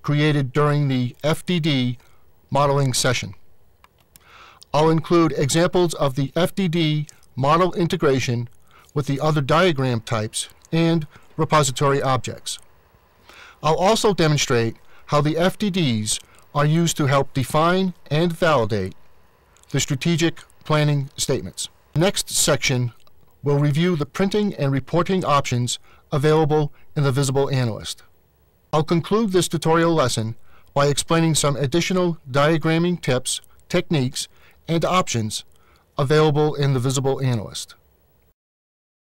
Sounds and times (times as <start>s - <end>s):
Speech: 0.0s - 3.4s, 4.7s - 12.6s, 13.6s - 19.0s, 19.7s - 28.1s, 28.7s - 37.8s.